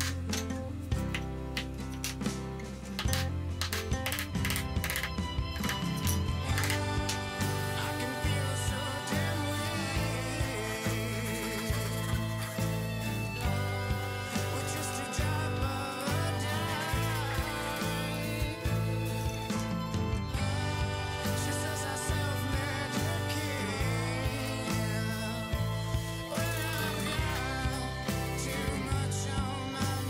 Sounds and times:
Wood: 0.0s - 29.2s
Music: 0.0s - 30.0s
Tools: 2.9s - 6.9s.

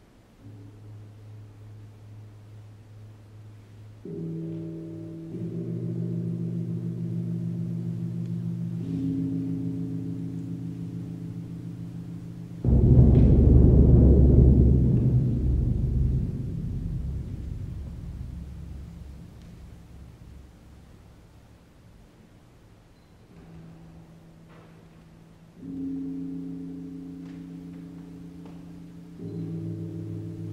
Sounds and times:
Gong: 3.1s - 21.3s, 23.3s - 30.5s.

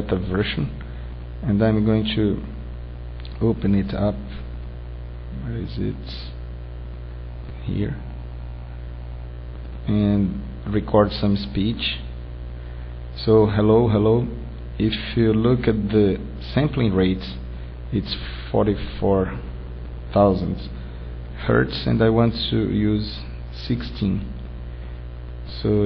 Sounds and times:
Male speech, man speaking: 0.0s - 0.8s, 1.4s - 2.6s, 3.4s - 4.4s, 5.4s - 6.4s, 7.6s - 8.2s, 9.9s - 12.2s, 13.2s - 19.5s, 20.1s - 20.8s, 21.4s - 24.4s, 25.5s - 25.8s.

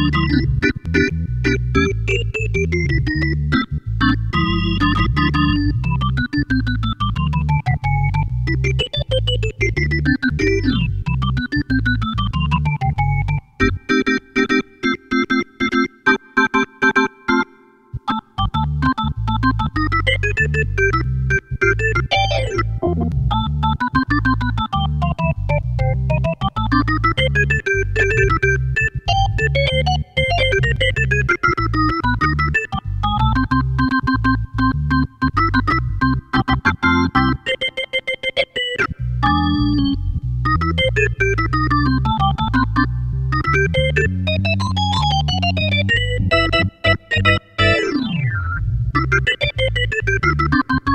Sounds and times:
Hammond organ: 0.0s - 50.9s.

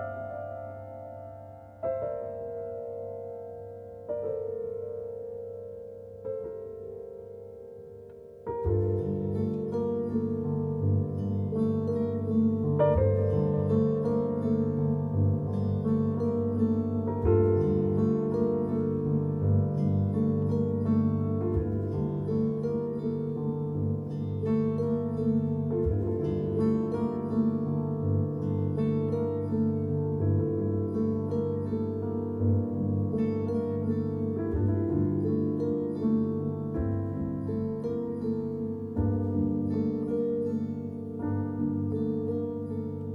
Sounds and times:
Harp: 0.0s - 43.1s.

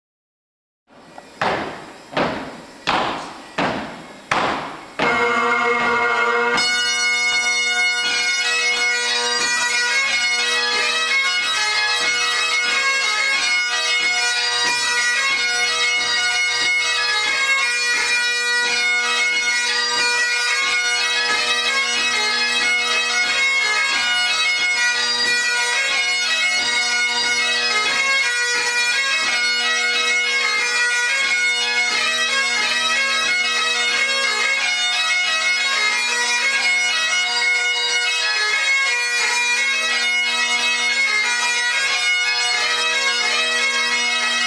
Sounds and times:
Bagpipes: 1.1s - 44.4s.

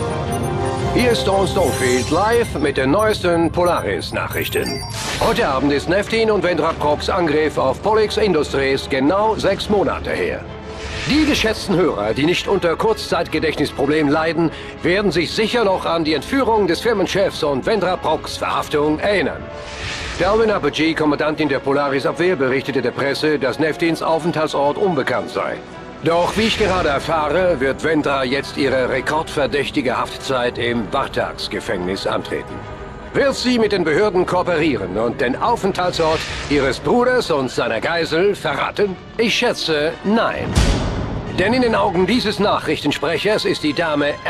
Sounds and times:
Music: 0.0s - 44.2s
Speech: 1.0s - 10.4s, 11.1s - 19.4s, 20.2s - 32.6s, 33.2s - 40.6s, 41.3s - 44.2s.

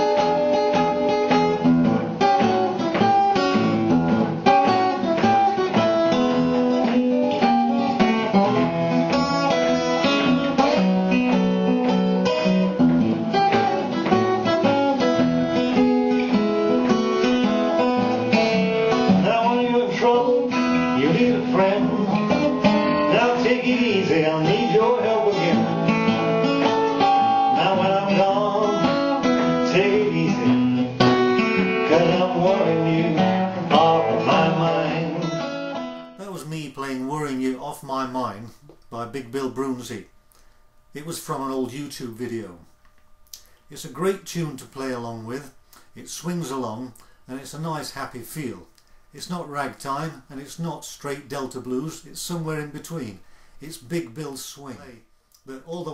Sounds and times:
Acoustic guitar: 0.0s - 55.9s.

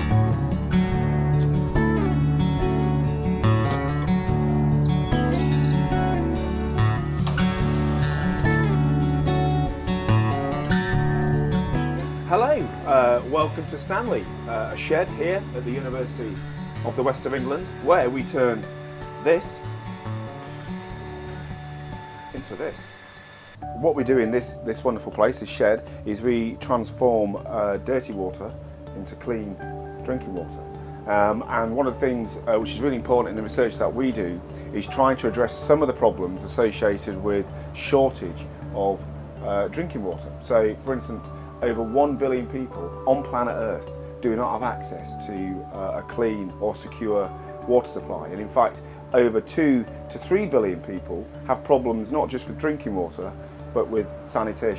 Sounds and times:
Music: 0.0s - 54.7s
Speech: 12.3s - 19.6s, 22.3s - 22.9s, 23.8s - 54.7s.

